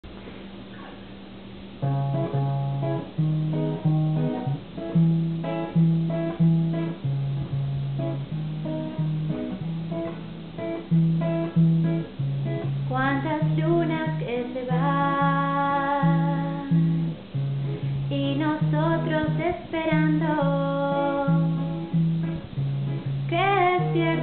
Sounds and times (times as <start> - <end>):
Acoustic guitar: 0.1 - 24.2.